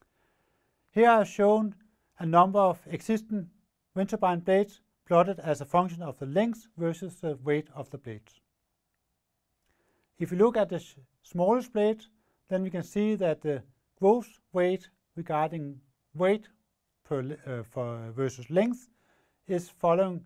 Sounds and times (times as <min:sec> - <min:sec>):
Speech: 0:00.9 - 0:08.4, 0:10.2 - 0:18.9, 0:19.5 - 0:20.2.